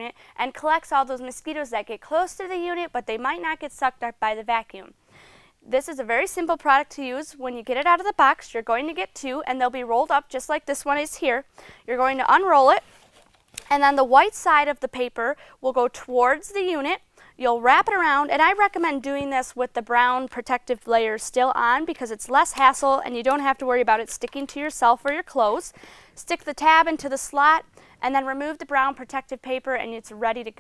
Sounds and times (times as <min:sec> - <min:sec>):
Speech: 0:00.0 - 0:04.9, 0:05.7 - 0:12.8, 0:13.7 - 0:30.6.